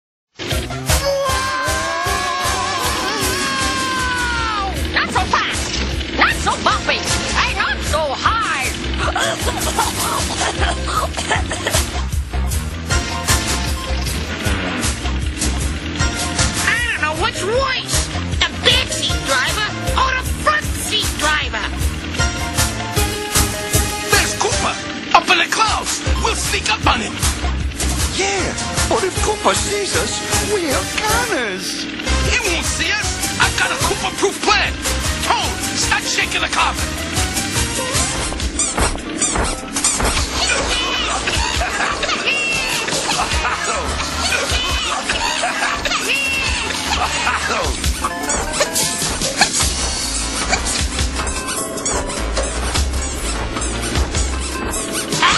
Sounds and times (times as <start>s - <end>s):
Music: 0.3s - 55.3s.